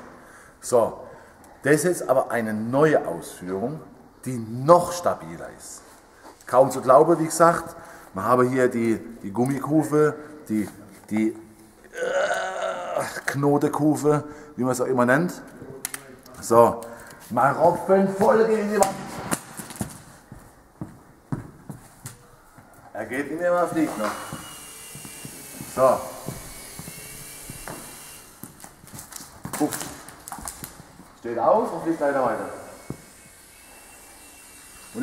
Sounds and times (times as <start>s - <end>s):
Speech: 0.6s - 5.8s, 6.5s - 11.4s, 12.6s - 19.1s, 23.0s - 24.3s, 31.2s - 32.8s.